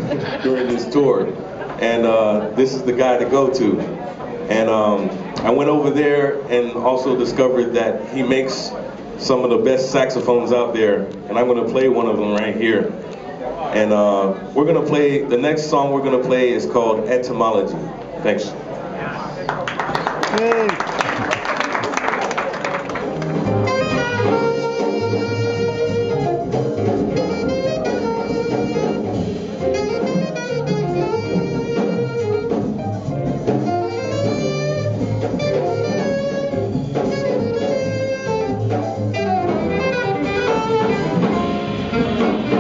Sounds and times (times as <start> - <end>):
Speech: 0.3 - 19.6.